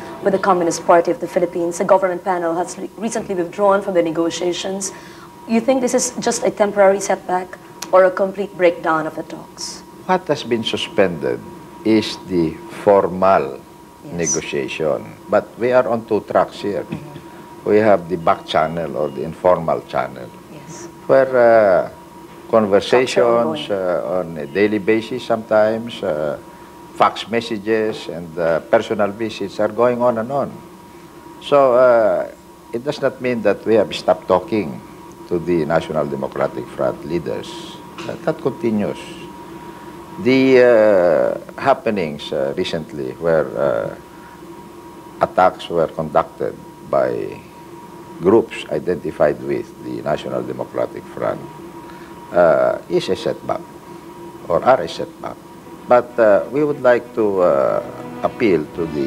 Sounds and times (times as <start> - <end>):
Speech: 7.8 - 22.0, 22.6 - 26.4, 27.0 - 30.6, 31.4 - 39.3, 40.2 - 44.0, 45.2 - 47.4, 48.2 - 51.5, 52.3 - 53.6, 54.5 - 59.0.